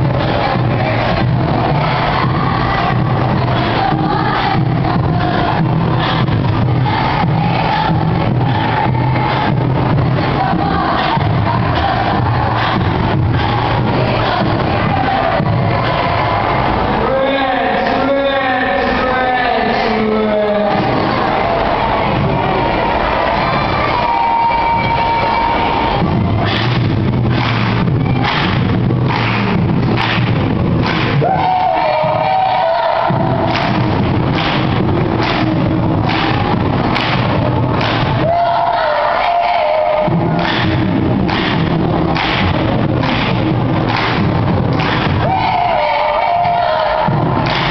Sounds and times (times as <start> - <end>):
Choir: 0.0 - 28.4, 30.8 - 44.2, 44.8 - 47.7.